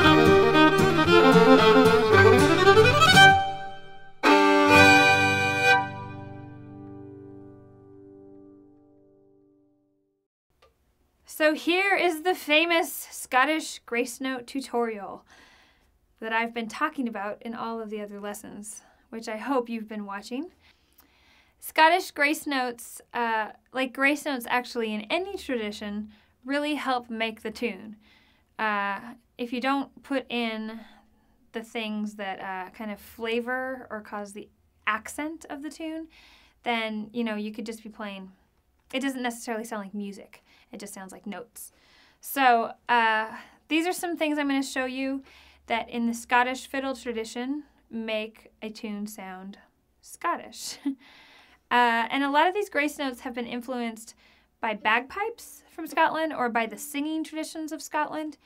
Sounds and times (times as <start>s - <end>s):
Speech: 11.3s - 15.2s, 16.2s - 20.6s, 21.6s - 28.0s, 28.6s - 30.9s, 31.5s - 36.1s, 36.7s - 51.0s, 51.7s - 58.4s.